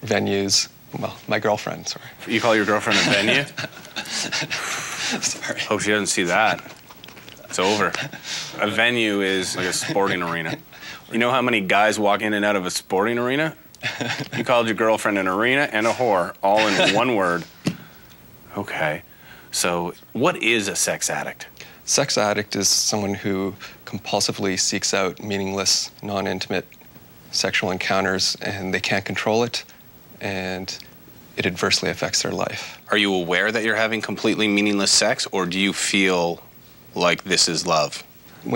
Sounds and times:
Speech: 0.0 - 3.6, 5.5 - 6.7, 7.5 - 13.6, 14.4 - 17.5, 18.5 - 26.7, 27.3 - 38.5.

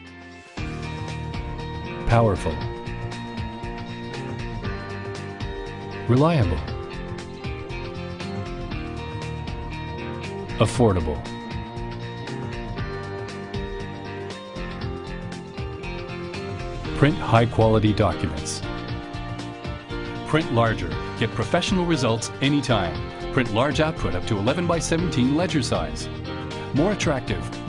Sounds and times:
Music: 0.0 - 27.6
Speech: 2.1 - 2.7, 6.1 - 6.7, 10.6 - 11.3, 17.0 - 18.6, 20.3 - 26.1, 26.7 - 27.6.

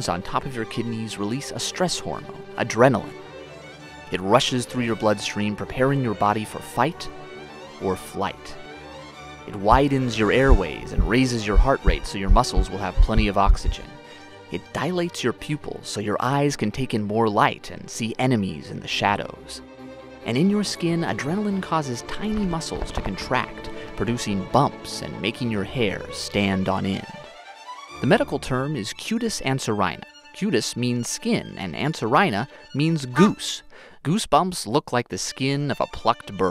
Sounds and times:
Speech: 0.0 - 3.2, 4.1 - 7.1, 7.8 - 8.6, 9.5 - 19.6, 20.3 - 27.3, 28.0 - 36.5
Music: 0.0 - 36.5.

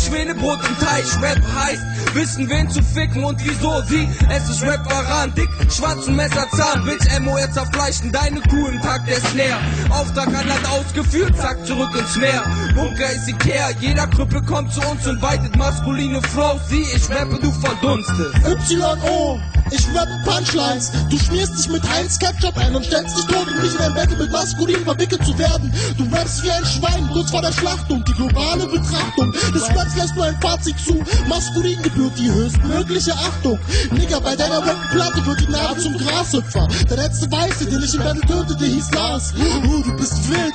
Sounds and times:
Hip hop music: 0.0 - 40.5.

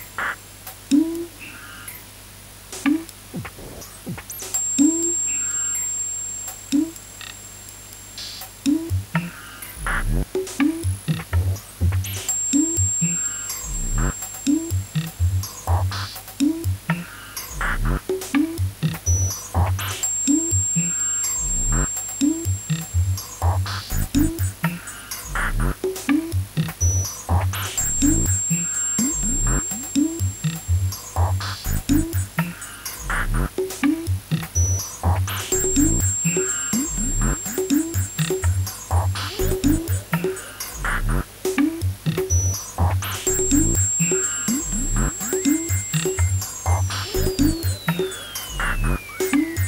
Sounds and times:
Electronica: 2.9 - 49.6.

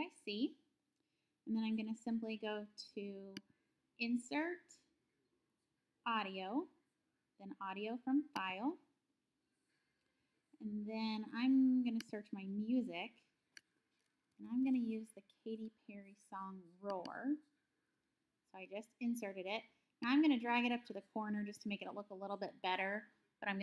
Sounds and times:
Speech: 0.0 - 0.6, 1.5 - 3.4, 4.0 - 4.9, 6.1 - 6.8, 7.4 - 8.9, 10.6 - 13.2, 14.4 - 17.5, 18.5 - 23.6.

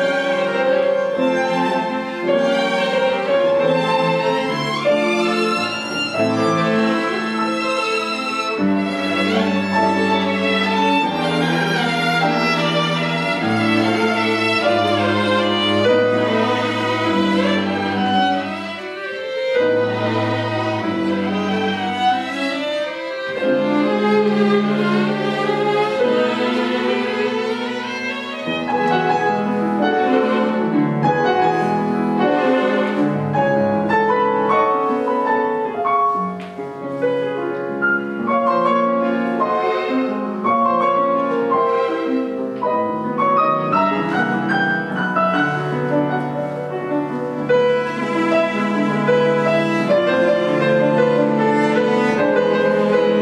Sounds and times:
Violin, fiddle: 0.0 - 53.2.

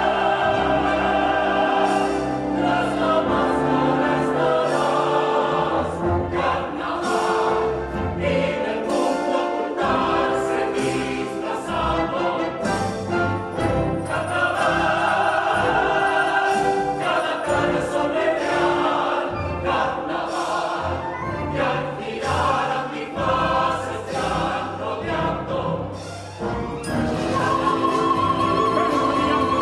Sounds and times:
Opera: 0.0 - 29.6.

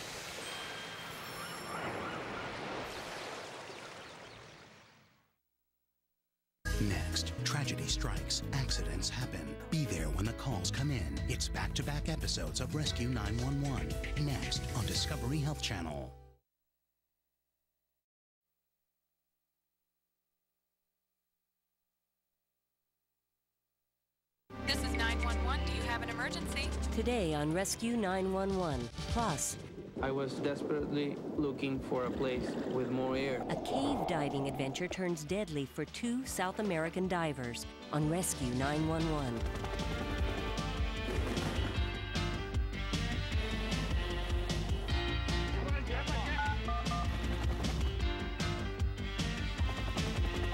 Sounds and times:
Speech: 6.7 - 16.2, 24.7 - 39.4
Music: 6.7 - 16.4, 24.5 - 30.2, 34.8 - 50.5.

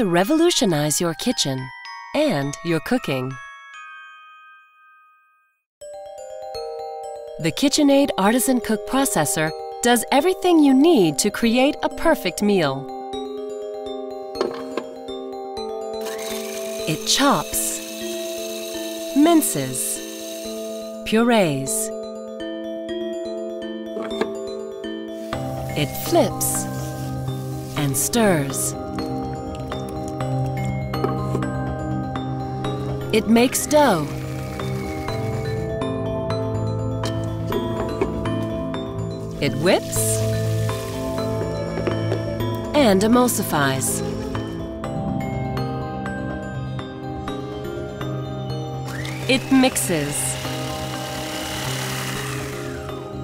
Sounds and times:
Blender: 16.0 - 21.0, 32.7 - 35.8, 39.8 - 42.6, 44.0 - 44.6, 48.8 - 53.2.

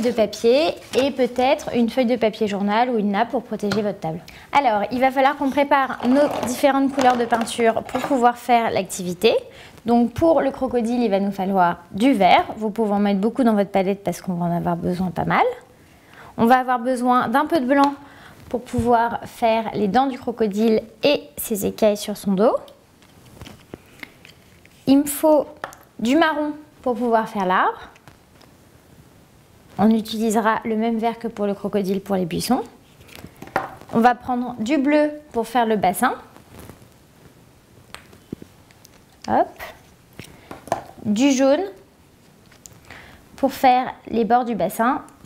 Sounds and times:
Speech: 0.0 - 15.7, 16.4 - 22.8, 24.9 - 28.0, 29.8 - 32.8, 33.9 - 36.3, 39.2 - 39.8, 41.0 - 41.8, 43.4 - 45.2.

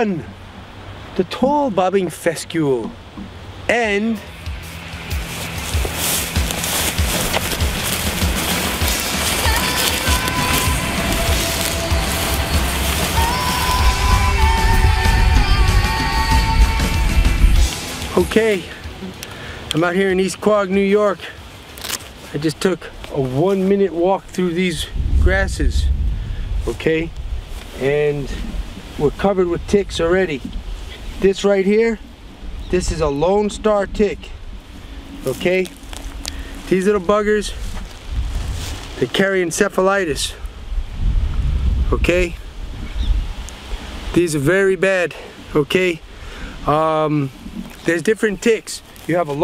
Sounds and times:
Speech: 0.0 - 0.3, 1.2 - 3.0, 3.7 - 4.3, 18.1 - 18.9, 19.8 - 21.4, 22.3 - 25.9, 26.6 - 27.1, 27.8 - 28.4, 29.0 - 30.5, 31.2 - 32.0, 32.7 - 34.4, 35.2 - 35.7, 36.7 - 37.6, 39.0 - 40.4, 41.9 - 42.4, 44.1 - 46.0, 46.7 - 49.4.

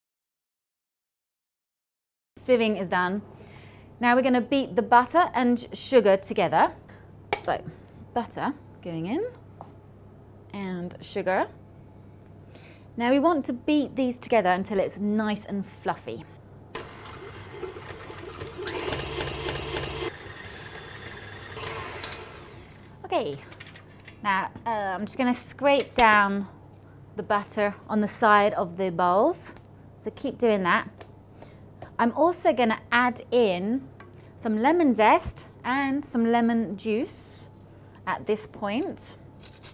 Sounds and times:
Speech: 2.4 - 3.2, 4.0 - 6.8, 7.4 - 9.4, 10.5 - 11.6, 13.0 - 16.3, 23.0 - 23.5, 24.2 - 26.5, 27.2 - 31.0, 32.0 - 37.5, 38.1 - 39.2.

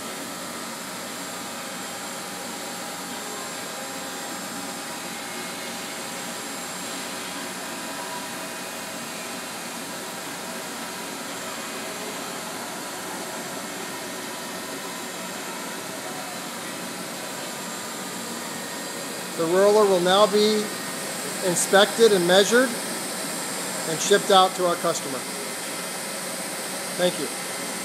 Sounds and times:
Speech: 19.4 - 20.7, 21.4 - 22.8, 23.9 - 25.3, 27.0 - 27.3.

